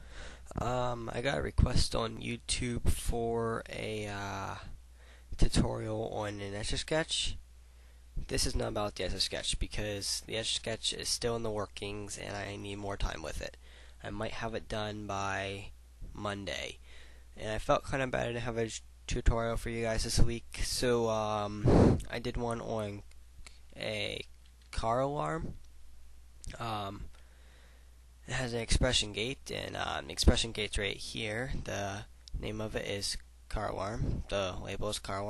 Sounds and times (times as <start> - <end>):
Speech: 0.5 - 4.8, 5.4 - 7.4, 8.2 - 16.8, 17.4 - 23.1, 23.8 - 25.6, 26.5 - 27.1, 28.3 - 35.3.